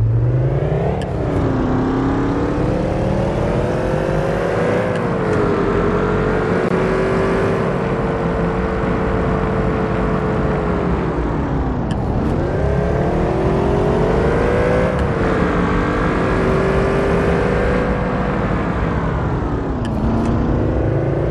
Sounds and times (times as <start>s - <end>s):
Car: 0.0s - 21.3s.